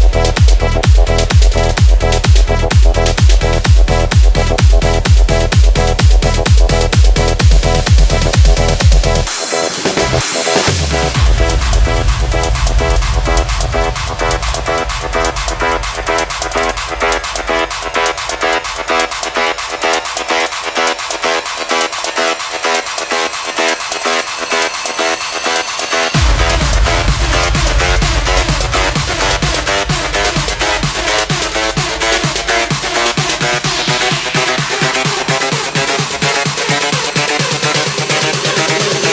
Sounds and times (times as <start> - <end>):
Electronic dance music: 0.0 - 39.1.